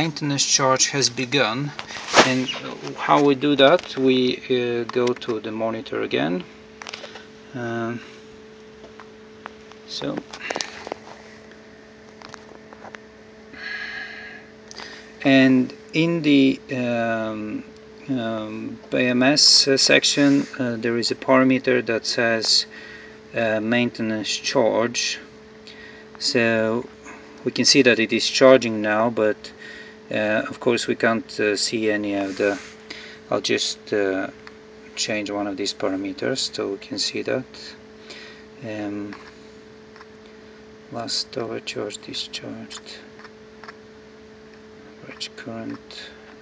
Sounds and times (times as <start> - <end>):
Speech: 0.0 - 6.5, 7.5 - 8.1, 9.9 - 10.3, 15.2 - 22.7, 23.3 - 25.3, 26.2 - 32.7, 33.3 - 37.8, 38.6 - 39.3, 40.9 - 43.1, 44.8 - 46.2.